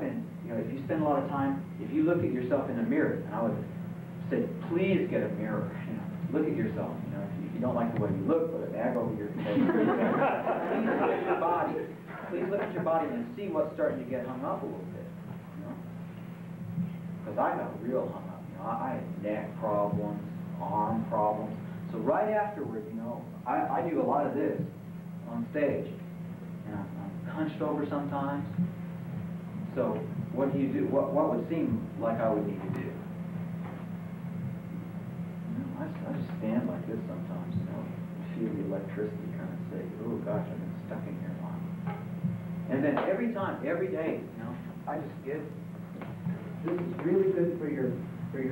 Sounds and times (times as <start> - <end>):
Male speech, man speaking: 0.0 - 10.0, 10.7 - 15.2, 17.2 - 26.0, 26.6 - 28.6, 29.6 - 33.1, 35.5 - 41.8, 42.7 - 45.6, 46.6 - 48.5.